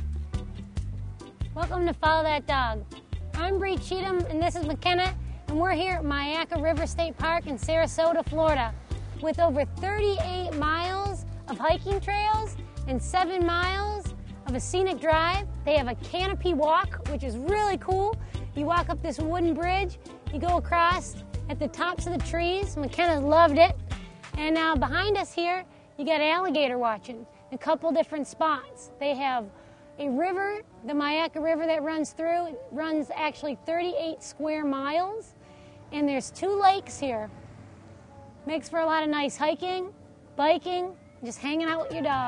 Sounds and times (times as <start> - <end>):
Music: 0.0 - 42.2
Speech: 1.6 - 2.8, 3.4 - 23.8, 24.4 - 35.3, 38.5 - 42.2.